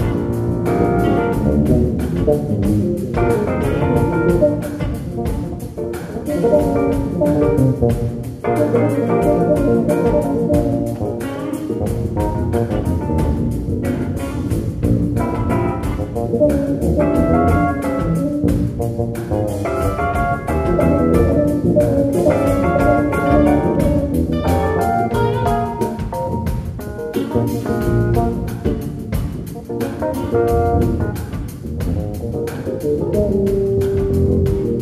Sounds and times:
Bass guitar: 0.0s - 34.8s
Drum: 0.0s - 34.8s
Jazz: 0.0s - 34.8s.

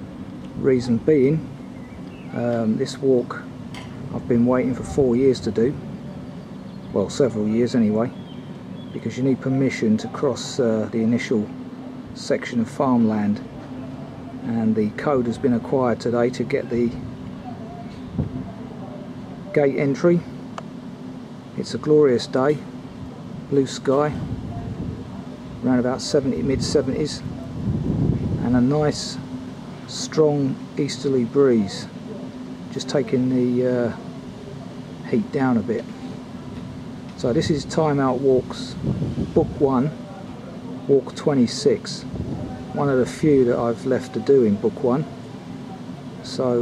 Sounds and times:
Speech: 0.6s - 1.5s, 2.3s - 3.5s, 4.1s - 5.9s, 6.9s - 8.2s, 9.0s - 11.6s, 12.2s - 20.4s, 21.6s - 22.7s, 23.5s - 25.0s, 25.6s - 27.6s, 28.4s - 29.3s, 29.9s - 36.1s, 37.2s - 38.8s, 39.4s - 46.6s.

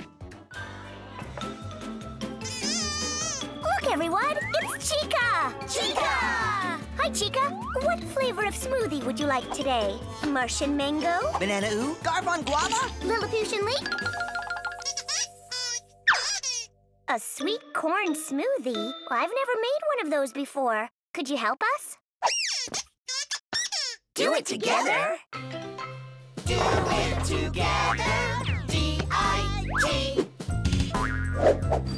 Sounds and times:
Music for children: 0.0s - 20.4s, 25.4s - 31.9s
Child speech, kid speaking: 3.7s - 11.4s, 12.0s - 13.9s, 17.1s - 22.0s, 24.2s - 25.2s.

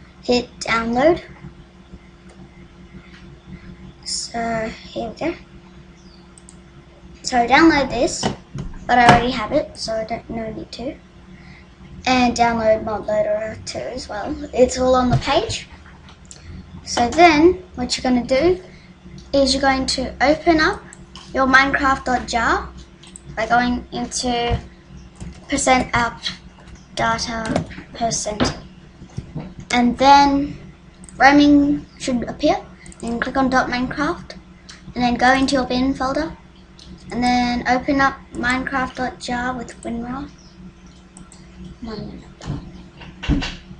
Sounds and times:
Speech: 0.3s - 1.3s, 4.1s - 5.4s, 7.3s - 8.3s, 8.9s - 11.0s, 12.1s - 15.7s, 16.9s - 18.6s, 19.4s - 22.7s, 23.4s - 24.6s, 25.5s - 26.4s, 27.0s - 28.6s, 29.7s - 30.6s, 31.2s - 34.4s, 35.0s - 36.4s, 37.1s - 40.3s, 41.8s - 42.3s.

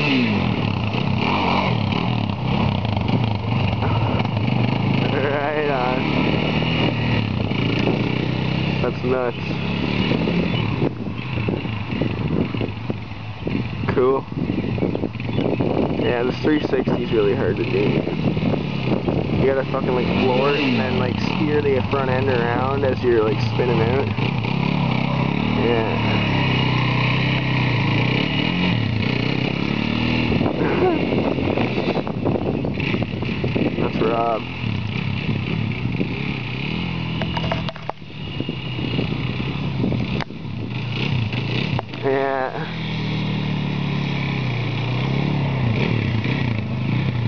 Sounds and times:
Speech: 5.0s - 6.1s, 8.8s - 9.5s, 16.0s - 18.0s, 19.4s - 24.1s, 25.6s - 26.1s, 33.8s - 34.4s, 42.0s - 42.7s.

